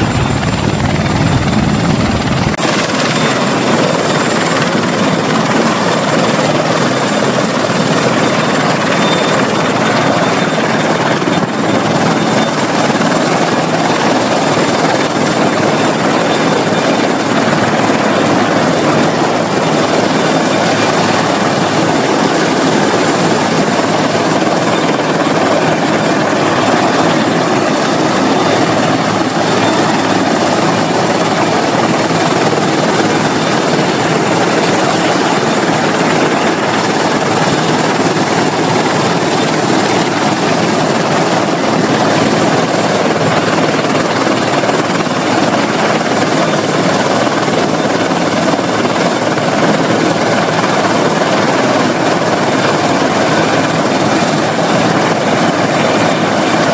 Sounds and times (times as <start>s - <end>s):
Helicopter: 0.0s - 56.7s.